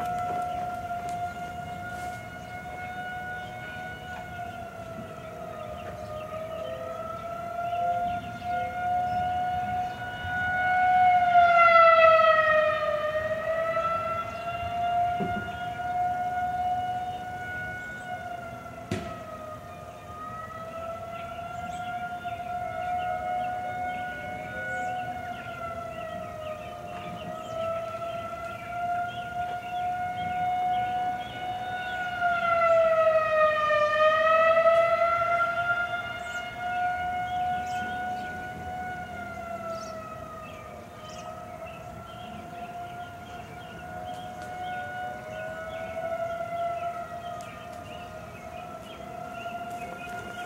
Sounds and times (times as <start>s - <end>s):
Emergency vehicle: 0.0s - 50.4s
Siren: 0.0s - 50.4s.